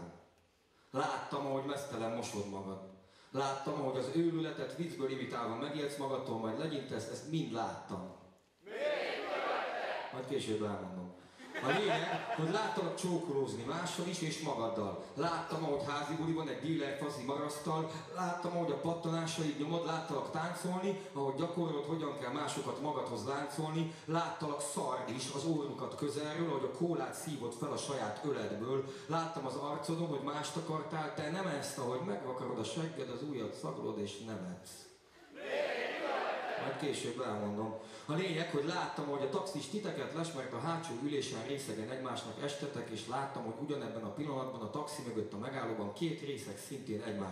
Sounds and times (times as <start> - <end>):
Speech: 0.0 - 0.3, 0.9 - 47.3.